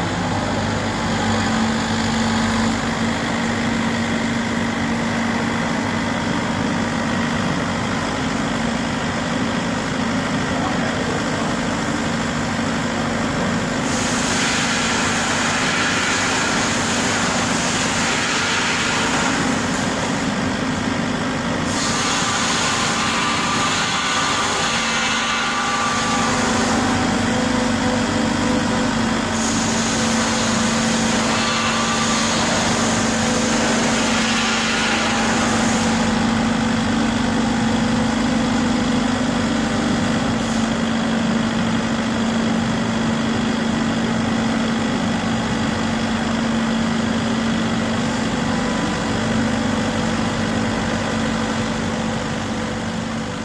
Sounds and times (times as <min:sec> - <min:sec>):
Heavy engine (low frequency): 0:00.0 - 0:53.4
Inside, large room or hall: 0:00.0 - 0:53.4
Vehicle: 0:00.0 - 0:53.4.